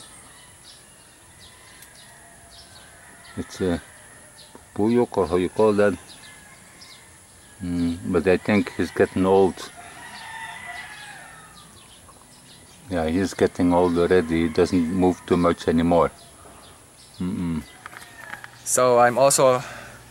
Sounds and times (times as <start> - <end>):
Outside, rural or natural: 0.0 - 20.1.